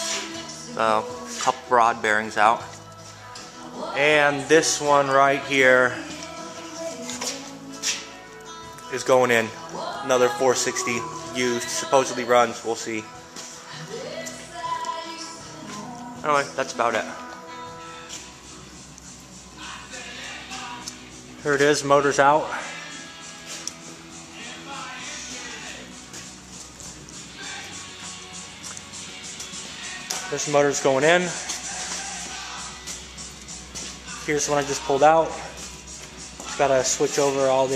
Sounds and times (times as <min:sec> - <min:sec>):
Music: 0:00.0 - 0:37.7
Speech: 0:04.0 - 0:06.0, 0:09.0 - 0:13.1, 0:16.2 - 0:17.2, 0:21.5 - 0:22.6, 0:30.3 - 0:31.4, 0:34.3 - 0:35.5, 0:36.5 - 0:37.7.